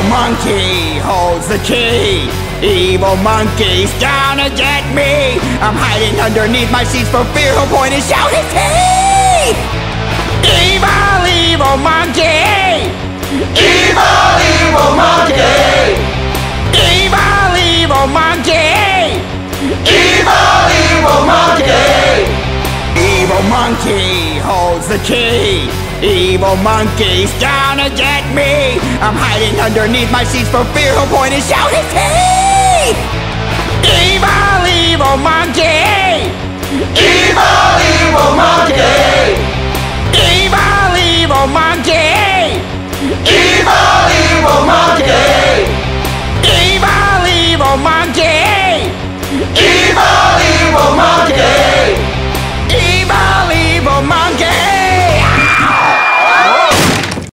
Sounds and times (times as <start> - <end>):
Music: 0.0 - 56.7.